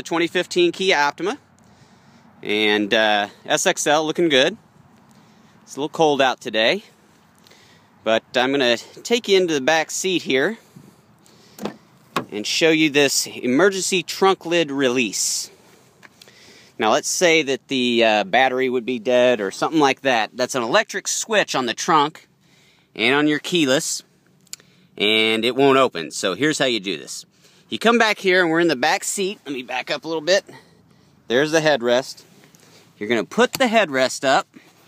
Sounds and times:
Speech: 0.0s - 1.5s, 2.4s - 4.6s, 5.7s - 6.9s, 8.0s - 10.6s, 12.3s - 15.6s, 16.8s - 22.3s, 23.0s - 24.1s, 25.0s - 30.6s, 31.3s - 32.3s, 33.0s - 34.6s.

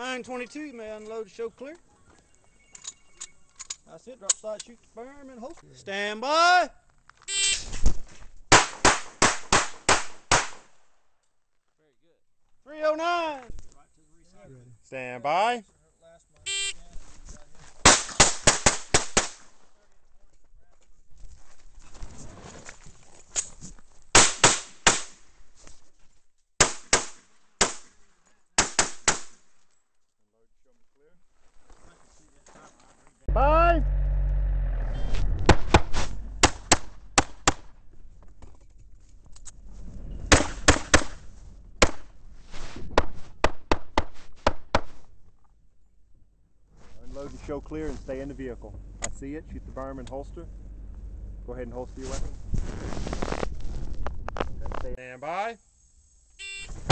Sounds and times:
Gunshot, gunfire: 8.5s - 10.7s, 17.8s - 19.4s, 24.2s - 25.2s, 26.6s - 27.9s, 28.6s - 29.4s, 35.5s - 37.7s, 40.3s - 41.2s, 41.8s - 42.1s.

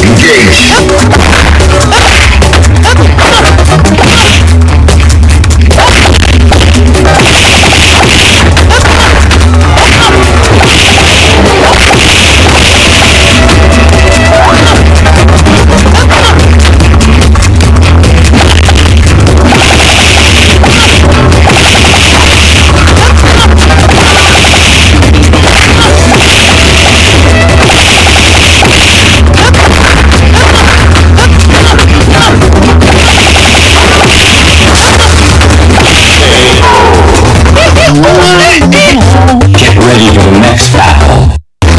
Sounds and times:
Music: 0.0s - 41.7s.

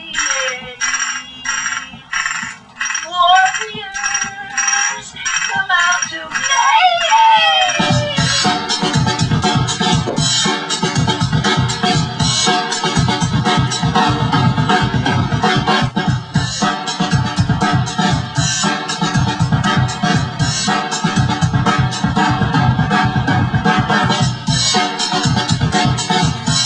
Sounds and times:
Techno: 0.0s - 26.6s.

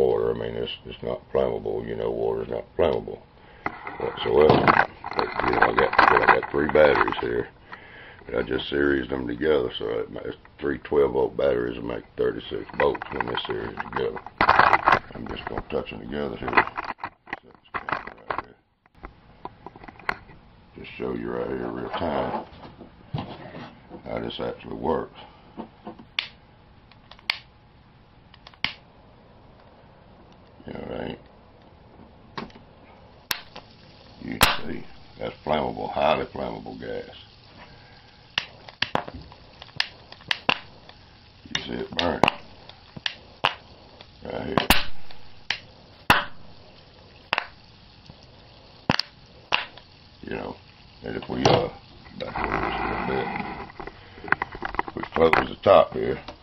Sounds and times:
Speech: 0.0s - 3.2s, 4.0s - 7.5s, 8.3s - 14.2s, 15.1s - 16.6s, 20.8s - 22.5s, 24.0s - 25.2s, 30.6s - 31.2s, 34.2s - 37.3s, 41.4s - 42.3s, 44.2s - 44.7s, 50.2s - 53.6s, 54.9s - 56.3s
Boiling: 0.0s - 56.4s
Inside, small room: 0.0s - 56.4s.

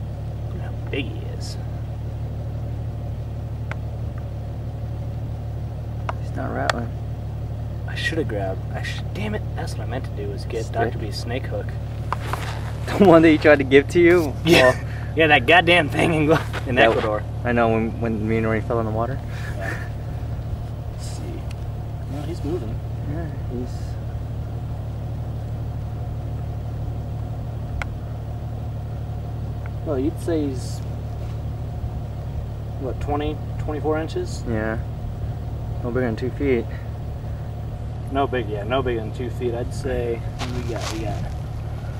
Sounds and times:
Outside, urban or manmade: 0.0s - 41.9s
Speech: 0.5s - 1.6s, 6.2s - 7.0s, 7.9s - 11.8s, 12.9s - 19.2s, 22.1s - 24.0s, 29.8s - 30.8s, 32.8s - 34.8s, 35.8s - 36.8s, 38.1s - 41.3s.

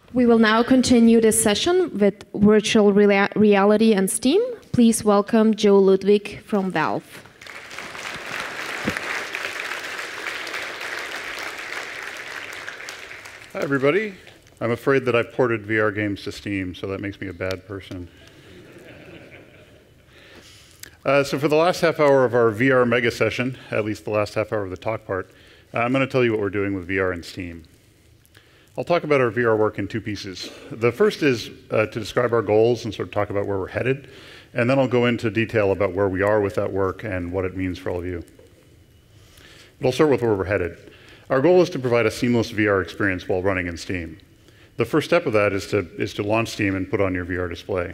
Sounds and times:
Speech: 13.6s - 18.1s, 21.0s - 27.6s, 28.8s - 34.0s, 34.6s - 38.3s, 39.8s - 44.2s, 44.8s - 47.9s.

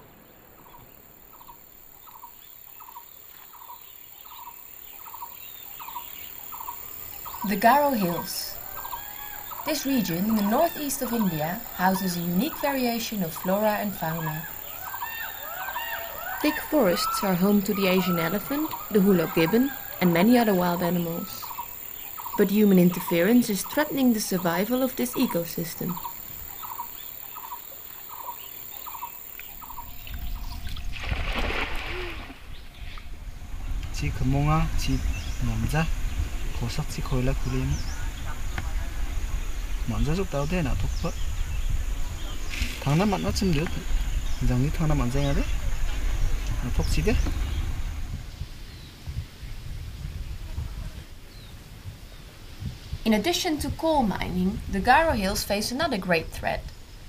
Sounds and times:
Outside, rural or natural: 0.0s - 57.0s
Bird: 0.5s - 33.1s.

